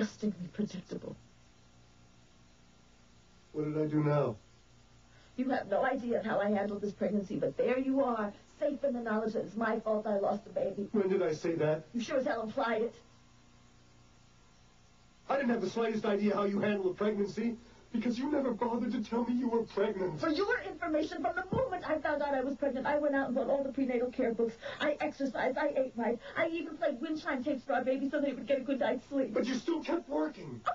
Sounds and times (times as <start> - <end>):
Conversation: 0.0 - 30.7.